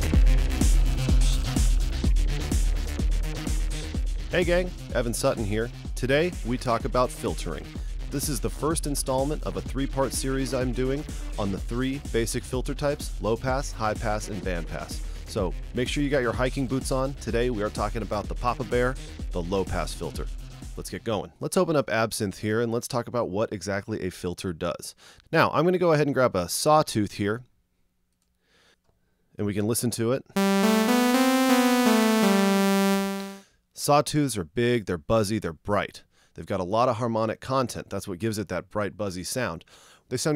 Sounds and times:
Speech: 4.3s - 27.5s, 33.9s - 40.3s.

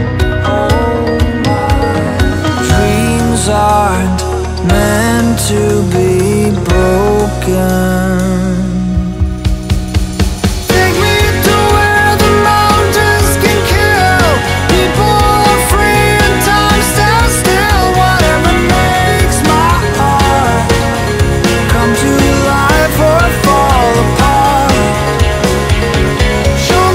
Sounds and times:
Music: 0.0s - 26.9s.

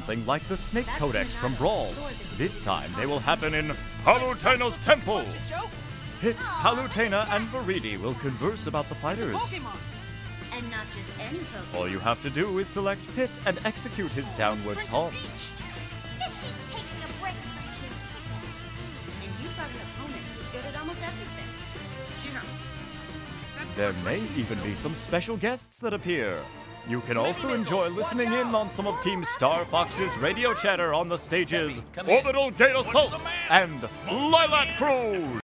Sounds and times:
Speech: 0.0s - 5.4s, 11.8s - 15.3s, 23.7s - 35.4s
Music: 0.0s - 35.4s.

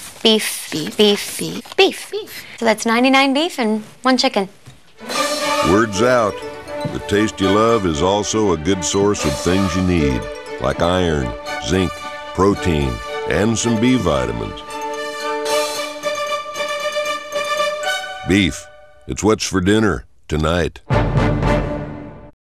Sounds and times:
Speech: 0.3s - 4.5s, 5.7s - 14.7s, 18.3s - 20.8s
Music: 5.0s - 19.1s, 20.9s - 22.4s.

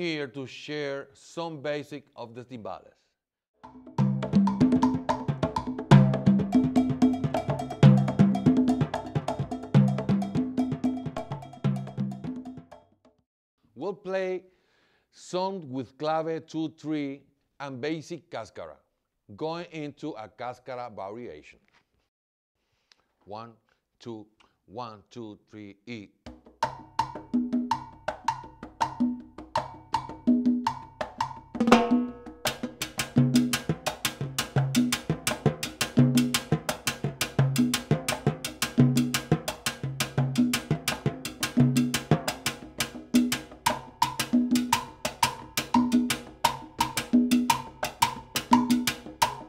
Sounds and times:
Speech: 0.0s - 3.1s, 13.8s - 14.5s, 15.2s - 21.6s, 23.3s - 26.2s
Music: 3.6s - 13.2s, 26.2s - 49.4s.

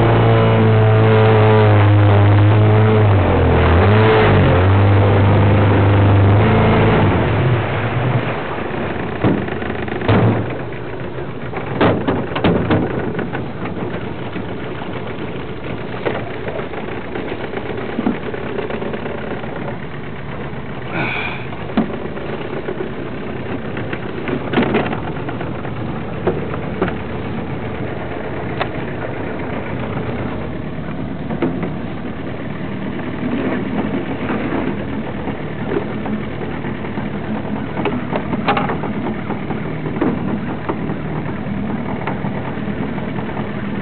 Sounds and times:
Boat, Water vehicle: 0.0s - 43.8s
Outside, rural or natural: 0.0s - 43.8s.

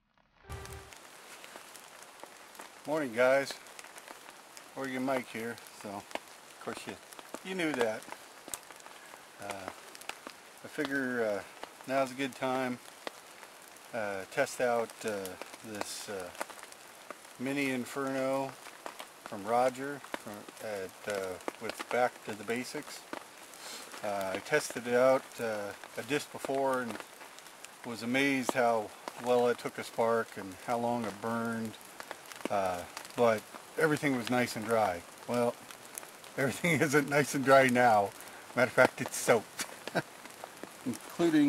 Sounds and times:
Rain on surface: 0.0s - 41.4s
Raindrop: 0.1s - 41.4s
Speech: 2.9s - 3.6s, 4.8s - 6.0s, 6.6s - 8.0s, 9.4s - 9.8s, 10.7s - 12.8s, 14.0s - 16.4s, 17.4s - 18.6s, 19.3s - 23.0s, 24.0s - 27.0s, 27.9s - 31.8s, 32.5s - 35.6s, 36.4s - 39.5s, 40.9s - 41.4s.

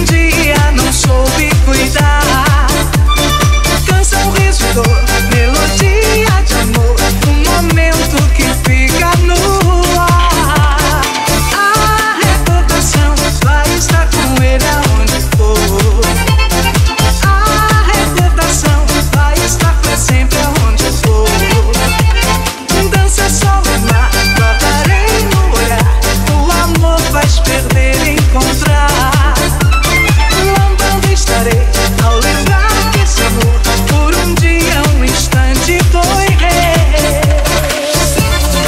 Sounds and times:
Dance music: 0.0s - 38.6s.

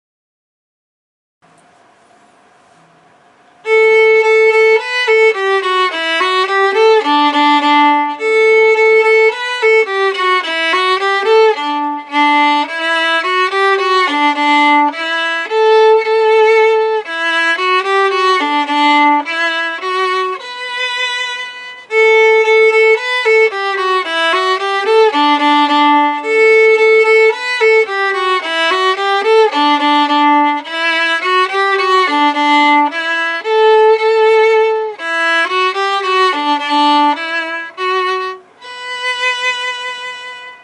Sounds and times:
Violin, fiddle: 3.6s - 40.6s.

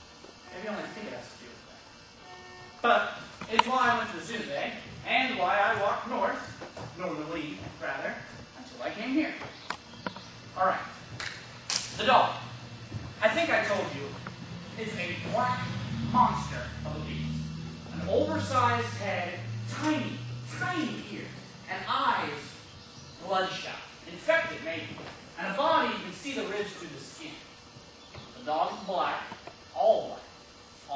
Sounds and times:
Narration, monologue: 0.0s - 30.9s.

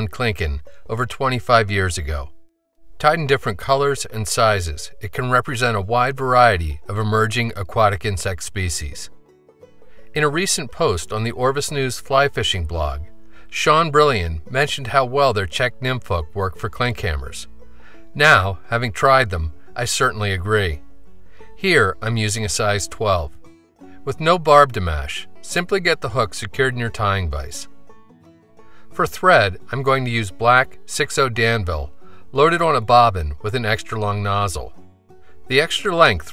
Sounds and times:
Speech: 0.0s - 2.3s, 3.0s - 9.1s, 10.1s - 17.5s, 18.2s - 20.8s, 21.6s - 23.4s, 24.0s - 27.7s, 29.0s - 34.8s, 35.5s - 36.3s
Music: 0.0s - 36.3s.

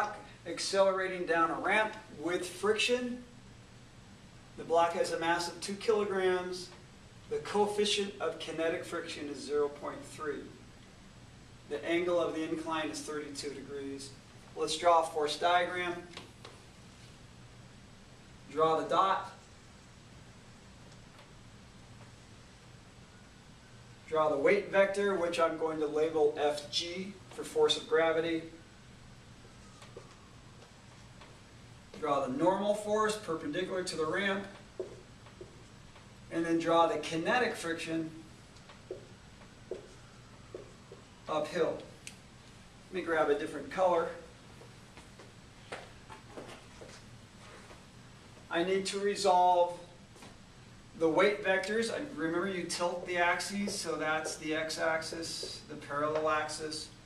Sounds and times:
Speech: 0.0s - 3.3s, 4.6s - 6.7s, 7.3s - 10.6s, 11.7s - 16.2s, 18.5s - 19.4s, 24.1s - 28.6s, 32.0s - 34.6s, 36.3s - 38.2s, 41.3s - 41.9s, 42.9s - 44.3s, 48.5s - 49.9s, 51.0s - 57.0s.

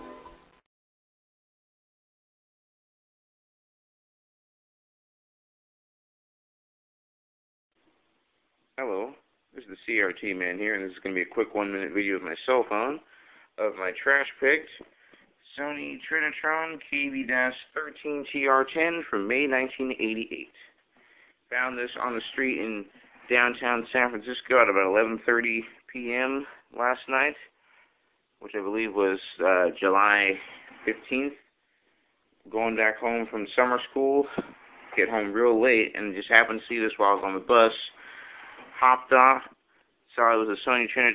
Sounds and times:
Speech: 8.8s - 20.7s, 21.5s - 27.6s, 28.4s - 31.5s, 32.4s - 38.0s, 38.7s - 41.1s.

